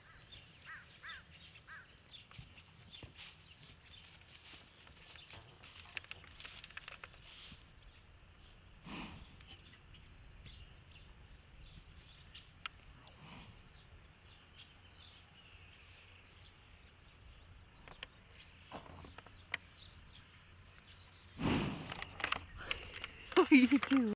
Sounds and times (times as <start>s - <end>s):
Speech: 23.4s - 24.1s.